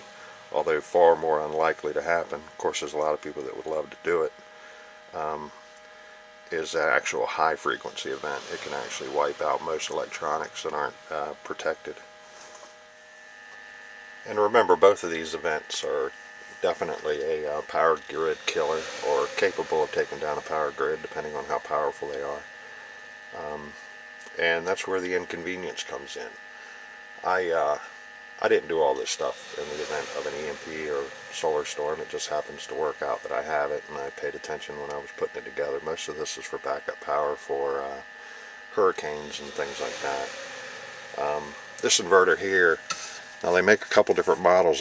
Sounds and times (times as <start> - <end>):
Speech: 0.0 - 4.4, 5.1 - 5.6, 6.5 - 12.0, 14.3 - 22.5, 23.4 - 26.4, 27.2 - 38.1, 38.7 - 40.3, 41.2 - 44.8.